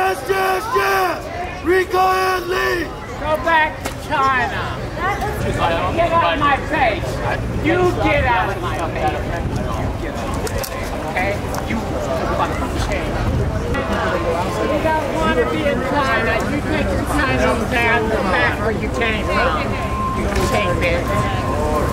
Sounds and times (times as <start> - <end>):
Male speech, man speaking: 0.0 - 4.8, 5.4 - 13.2, 13.8 - 21.4
Conversation: 0.0 - 21.8.